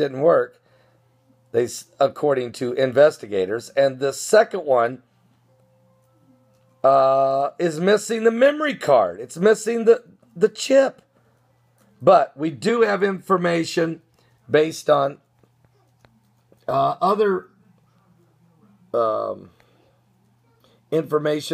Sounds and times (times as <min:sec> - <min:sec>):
Speech: 0:00.0 - 0:00.6, 0:01.6 - 0:05.0, 0:06.9 - 0:11.0, 0:12.0 - 0:15.2, 0:16.6 - 0:19.6, 0:20.3 - 0:21.5.